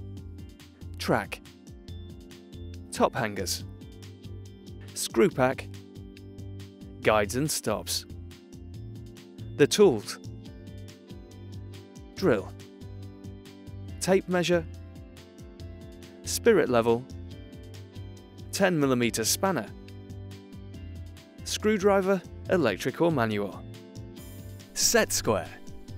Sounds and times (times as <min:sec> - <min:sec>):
Music: 0:00.0 - 0:25.9
Speech: 0:01.0 - 0:01.4, 0:02.9 - 0:03.6, 0:05.0 - 0:05.7, 0:07.0 - 0:08.0, 0:09.6 - 0:10.2, 0:12.2 - 0:12.6, 0:14.0 - 0:14.7, 0:16.3 - 0:17.1, 0:18.5 - 0:19.8, 0:21.5 - 0:23.6, 0:24.8 - 0:25.6.